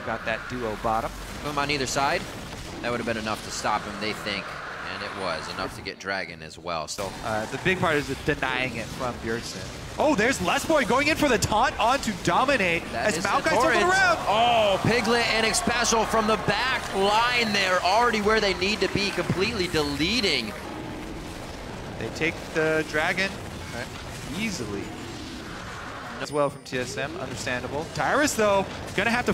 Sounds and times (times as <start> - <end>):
Speech: 0.0 - 2.2, 2.8 - 20.5, 26.2 - 29.3.